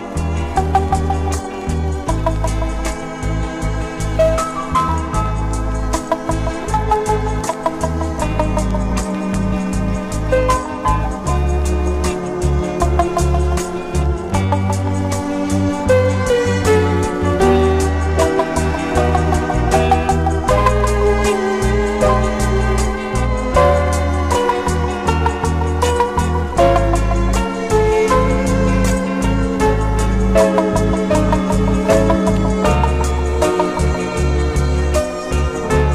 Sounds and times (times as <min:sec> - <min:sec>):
Music: 0:00.0 - 0:35.9.